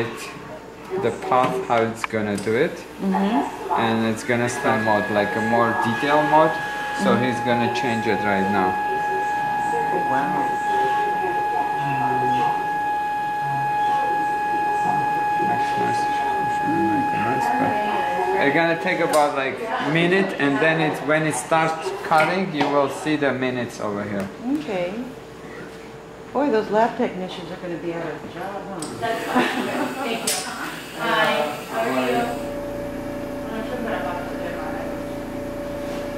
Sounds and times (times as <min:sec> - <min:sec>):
Speech: 0:00.0 - 0:12.7.